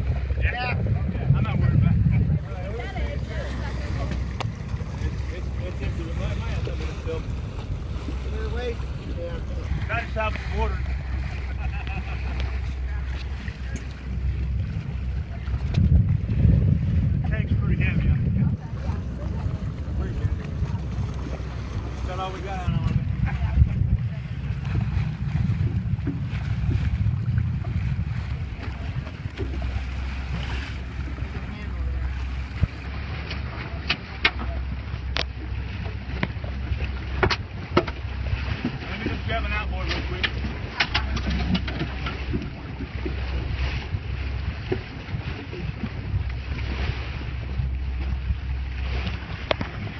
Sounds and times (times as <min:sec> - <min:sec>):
Boat, Water vehicle: 0:00.0 - 0:49.9.